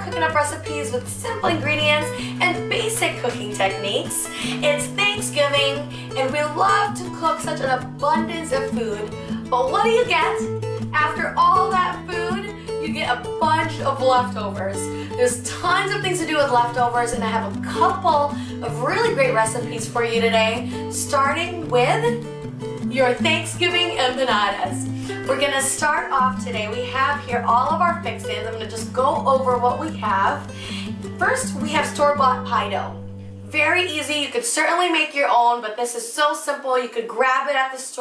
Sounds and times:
Speech: 0:00.0 - 0:10.4, 0:11.0 - 0:22.2, 0:22.9 - 0:30.5, 0:31.2 - 0:38.0
Music: 0:00.0 - 0:38.0.

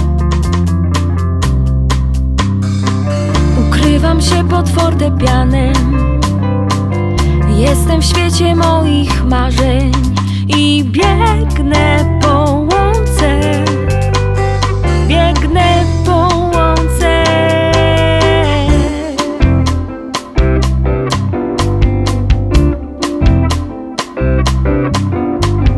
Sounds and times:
Independent music: 0:00.0 - 0:25.7
Tender music: 0:02.4 - 0:25.7.

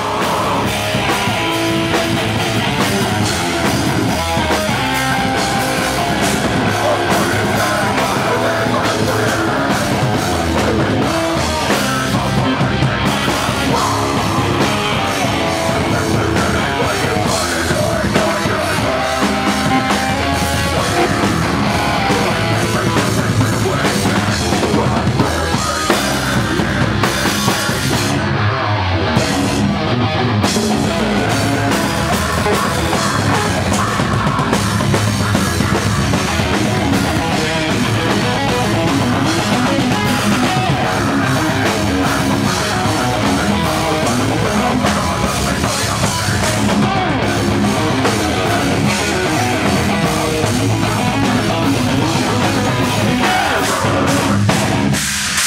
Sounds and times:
Singing: 0:00.0 - 0:03.4, 0:04.2 - 0:28.4, 0:30.6 - 0:54.6
Music: 0:00.0 - 0:55.4.

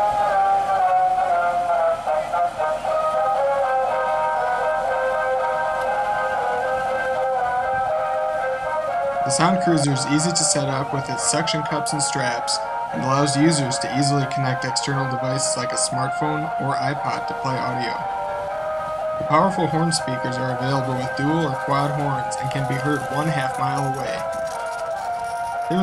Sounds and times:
Music: 0:00.0 - 0:25.8
Speech: 0:09.3 - 0:18.0, 0:19.2 - 0:24.4.

